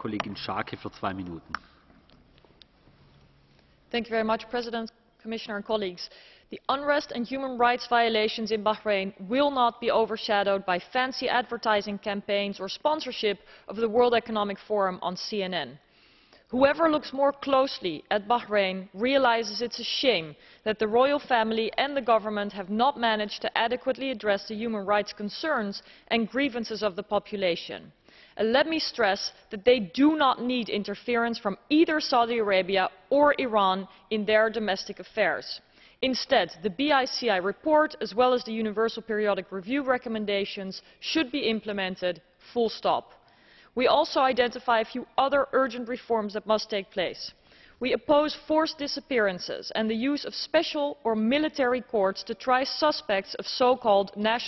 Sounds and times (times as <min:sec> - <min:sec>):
Female speech, woman speaking: 0:04.0 - 0:15.8, 0:16.6 - 0:43.1, 0:43.8 - 0:54.4.